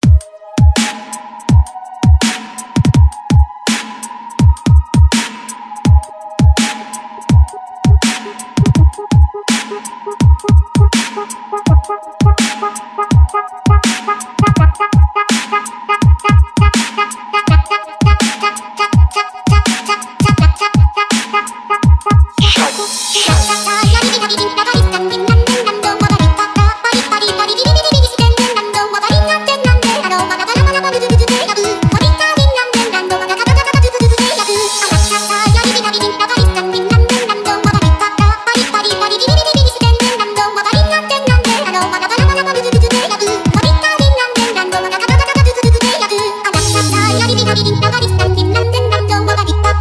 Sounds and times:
Dubstep: 18.1s - 49.8s.

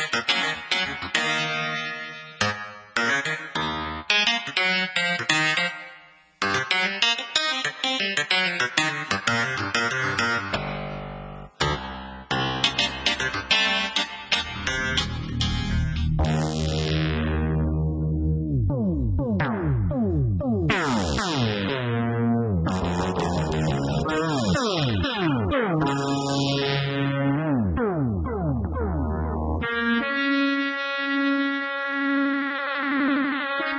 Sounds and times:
Music: 0.0s - 33.7s.

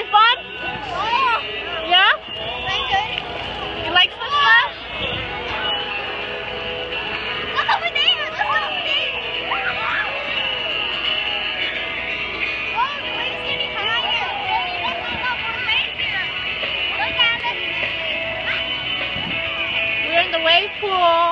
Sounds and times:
Music: 0.0s - 21.3s.

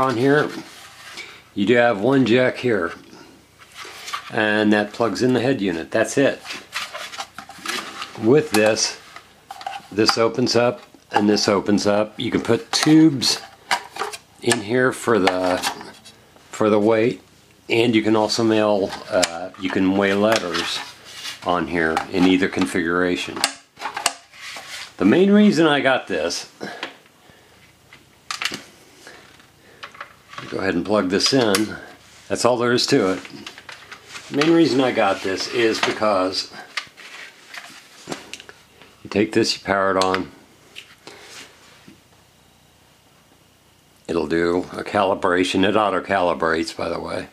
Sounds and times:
Speech: 0.0s - 0.7s, 1.6s - 3.2s, 4.3s - 6.5s, 8.1s - 9.0s, 9.9s - 13.5s, 14.4s - 23.6s, 25.0s - 26.8s, 30.4s - 33.5s, 34.3s - 36.7s, 39.0s - 40.4s, 44.0s - 47.3s
Inside, small room: 0.0s - 47.3s.

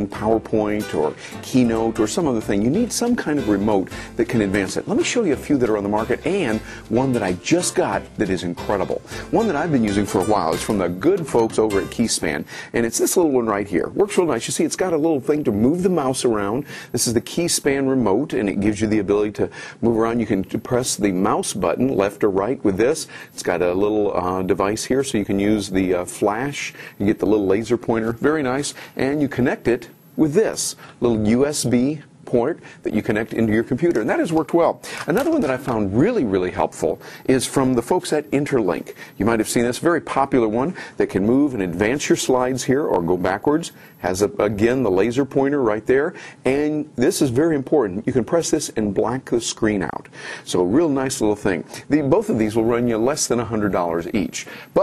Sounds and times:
Speech: 0.0s - 54.8s.

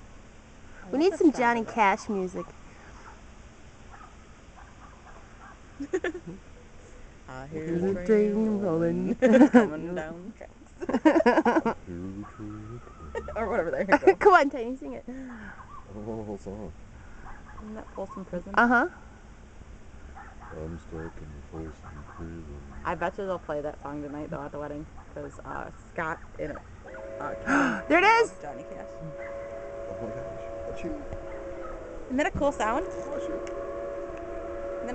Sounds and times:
Speech: 7.3s - 10.4s, 11.9s - 14.5s, 15.9s - 16.7s, 20.6s - 24.7s.

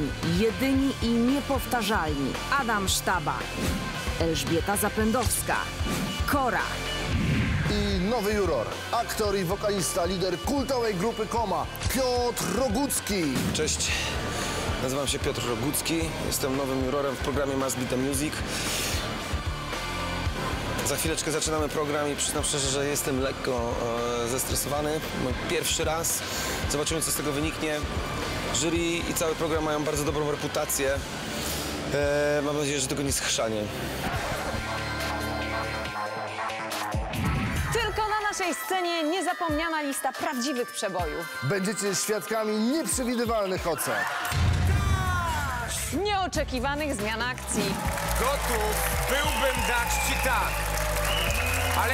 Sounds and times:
Music: 0.0s - 51.9s.

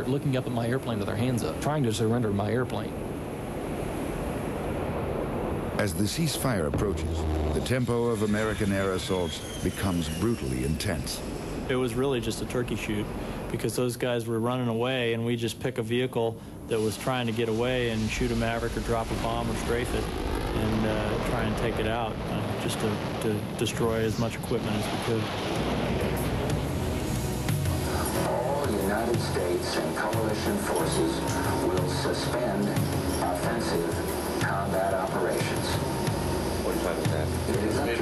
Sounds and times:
Speech: 0.0s - 3.0s, 5.8s - 25.4s, 28.2s - 35.8s, 36.7s - 38.0s.

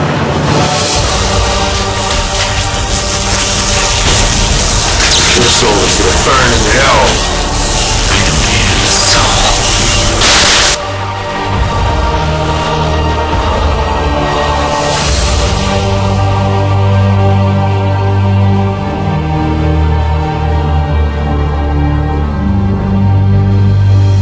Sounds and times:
Music: 0.0s - 24.2s.

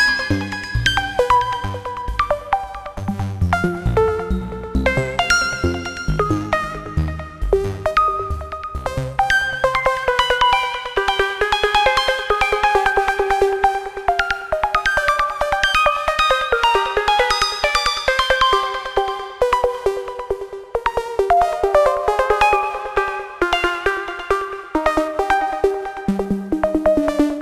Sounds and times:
Music: 0.0s - 27.4s.

